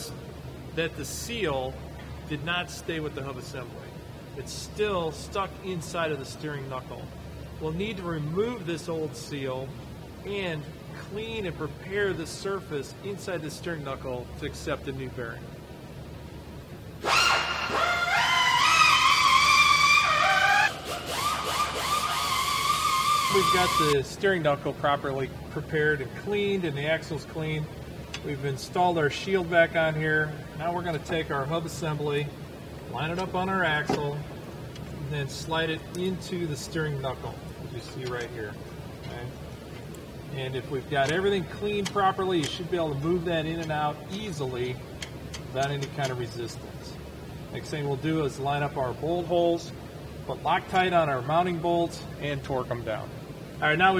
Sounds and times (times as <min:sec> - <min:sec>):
Speech: 0:00.8 - 0:15.4, 0:23.3 - 0:32.3, 0:32.9 - 0:34.3, 0:35.0 - 0:39.4, 0:40.3 - 0:44.8, 0:45.5 - 0:47.0, 0:47.6 - 0:53.9
Inside, large room or hall: 0:17.0 - 0:24.0.